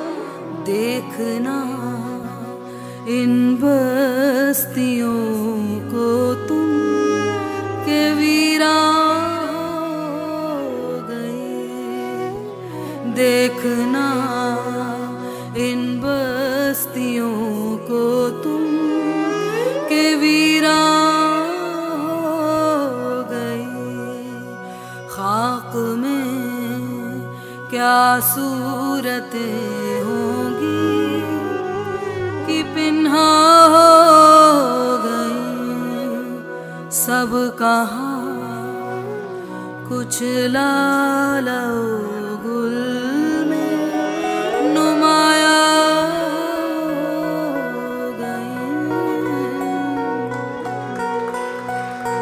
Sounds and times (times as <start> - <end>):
Singing: 0.0 - 51.2
Music: 0.0 - 52.2.